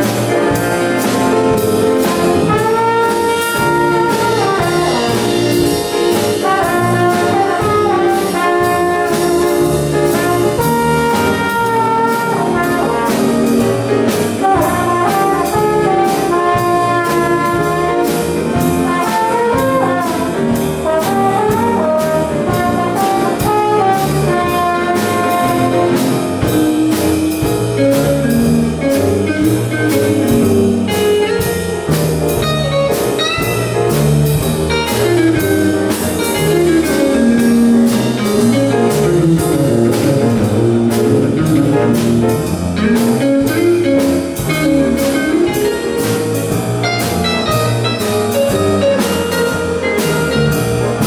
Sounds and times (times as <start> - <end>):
Music: 0.0 - 51.0.